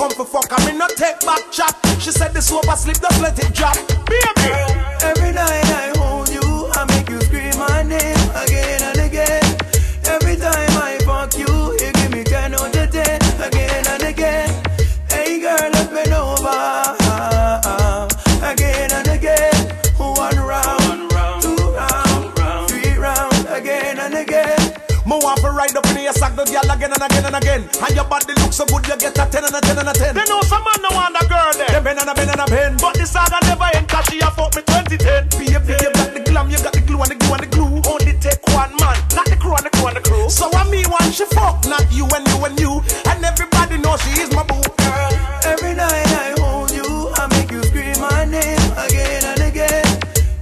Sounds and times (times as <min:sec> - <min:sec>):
Rapping: 0:00.0 - 0:50.3
Hip hop music: 0:00.0 - 0:50.4
Reggae: 0:00.0 - 0:50.4.